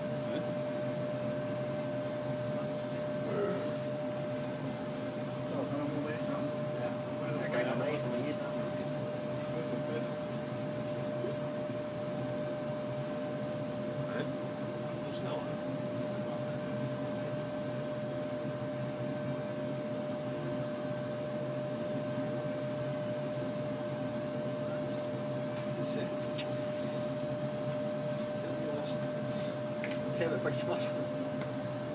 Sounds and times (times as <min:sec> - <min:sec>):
Speech: 0:05.5 - 0:10.2, 0:25.8 - 0:26.2, 0:30.1 - 0:31.1.